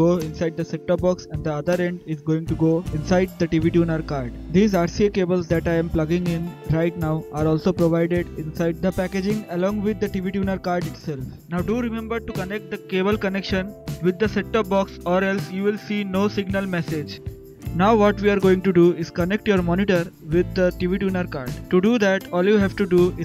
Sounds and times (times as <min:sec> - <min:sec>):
Music: 0:00.0 - 0:23.2
Speech: 0:00.0 - 0:23.2.